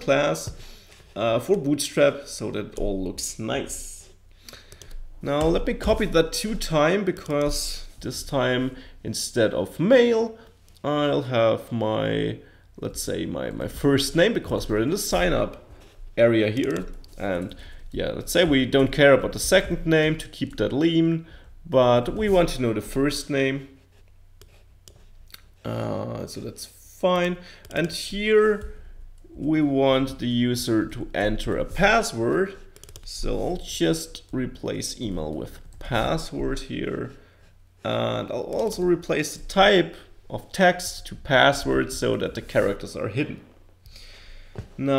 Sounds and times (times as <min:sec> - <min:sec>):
Computer keyboard: 0:16.6 - 0:17.6, 0:32.8 - 0:33.1.